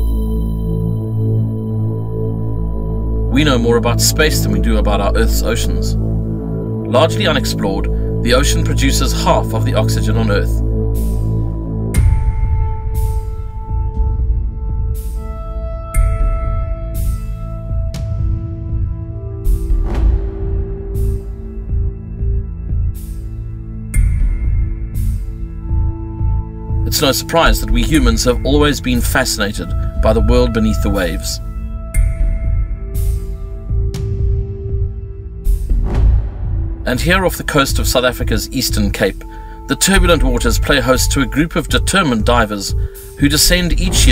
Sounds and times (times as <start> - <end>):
Music: 0.0 - 44.1
Speech: 3.3 - 6.0, 6.9 - 10.6, 26.9 - 31.4, 36.9 - 44.1.